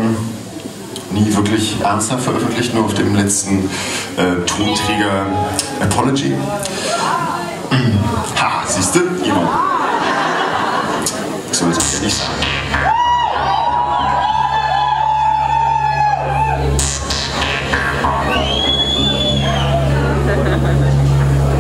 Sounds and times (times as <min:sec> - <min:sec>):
Speech: 0:01.1 - 0:09.9, 0:11.5 - 0:12.3
Music: 0:11.8 - 0:21.6.